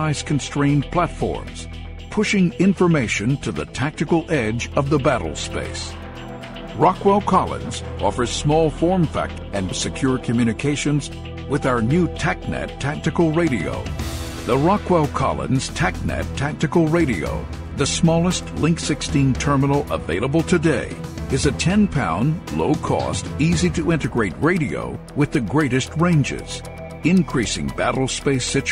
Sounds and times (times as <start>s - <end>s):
Speech: 0.0s - 6.0s, 6.8s - 13.9s, 14.5s - 28.7s
Music: 0.0s - 28.7s.